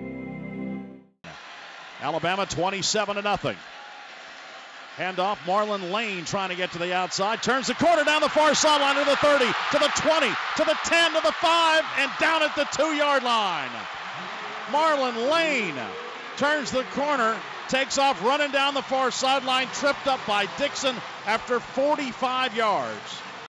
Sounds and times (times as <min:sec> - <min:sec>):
Speech: 0:02.0 - 0:03.6, 0:05.0 - 0:13.8, 0:14.7 - 0:23.2.